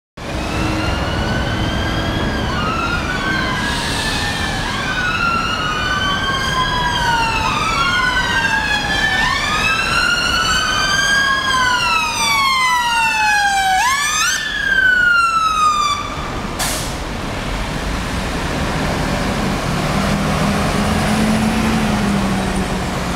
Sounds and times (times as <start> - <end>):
Police car (siren): 0.2 - 16.6.